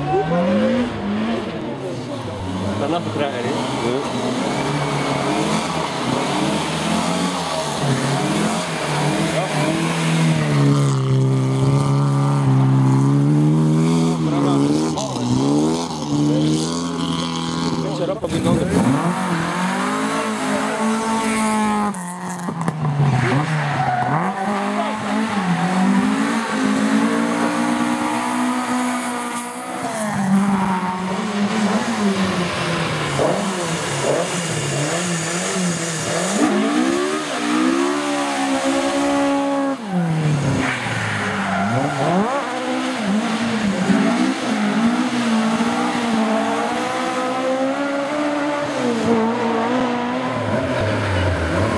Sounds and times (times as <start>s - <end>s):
Speech: 1.6s - 4.2s, 14.2s - 15.5s, 17.7s - 19.0s.